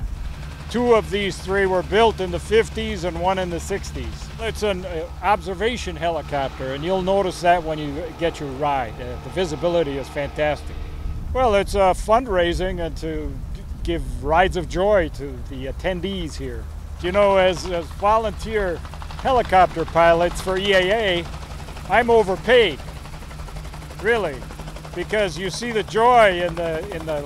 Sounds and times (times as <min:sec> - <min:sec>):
Speech: 0:00.7 - 0:10.7, 0:11.4 - 0:21.3, 0:21.9 - 0:22.8, 0:24.0 - 0:24.4, 0:25.0 - 0:27.2.